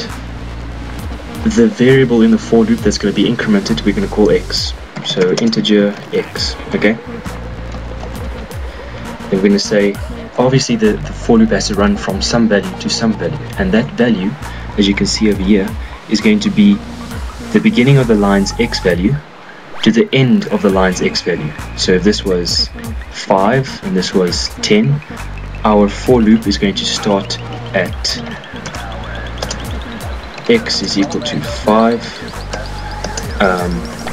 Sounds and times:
Speech: 0.0 - 0.2, 1.4 - 7.1, 9.3 - 16.8, 17.5 - 29.6, 30.5 - 34.1
Music: 0.0 - 34.1.

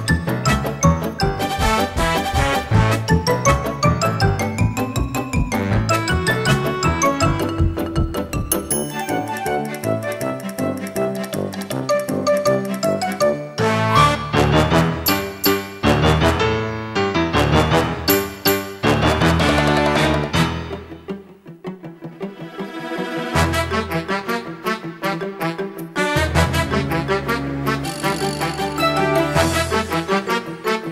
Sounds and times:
Music: 0.0 - 30.9.

